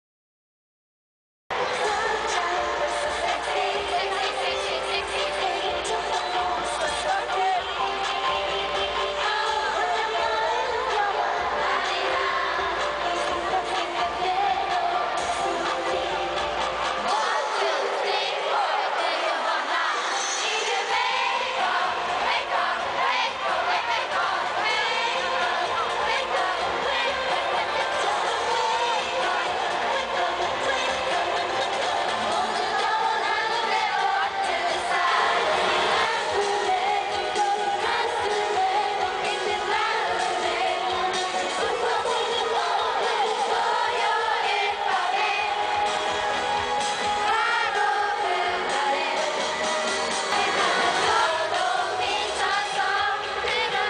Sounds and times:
Music: 0:01.5 - 0:53.8.

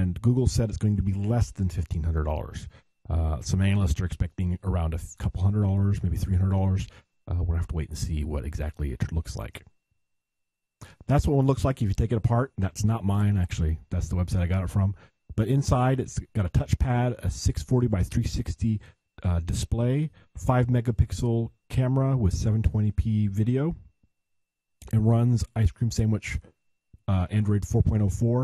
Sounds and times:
Speech: 0:00.0 - 0:09.7, 0:10.8 - 0:23.9, 0:24.8 - 0:28.4.

